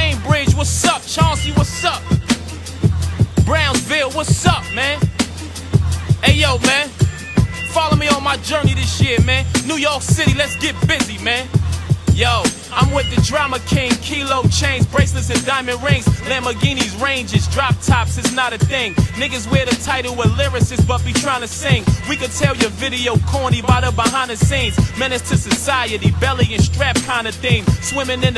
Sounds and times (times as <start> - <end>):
Music: 0.0 - 28.3.